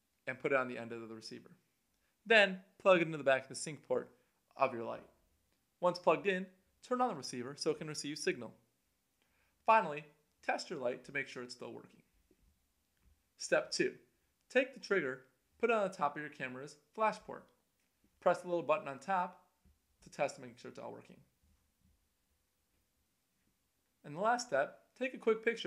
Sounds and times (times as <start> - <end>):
Speech: 0.3 - 1.6, 2.3 - 5.1, 5.8 - 8.6, 9.7 - 12.0, 13.4 - 17.5, 18.2 - 19.4, 20.0 - 21.3, 24.1 - 25.6.